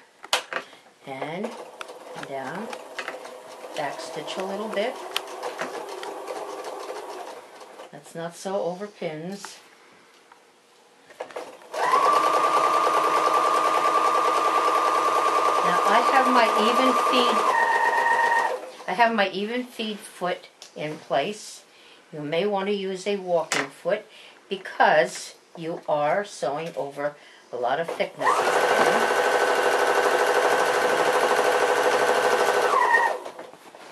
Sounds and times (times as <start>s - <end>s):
Inside, small room: 0.0s - 33.9s
Speech: 1.0s - 1.6s, 2.2s - 2.7s, 3.8s - 5.0s, 7.9s - 9.6s, 15.6s - 17.5s, 18.9s - 28.3s
Sewing machine: 1.4s - 7.9s, 11.4s - 18.8s, 28.2s - 33.4s.